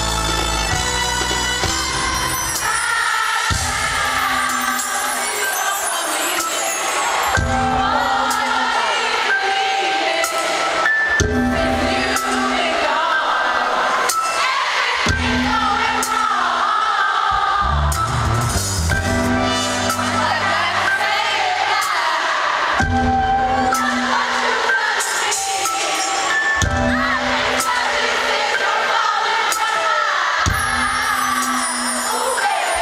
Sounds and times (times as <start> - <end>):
Crowd: 0.0 - 32.8
Music: 0.0 - 32.8.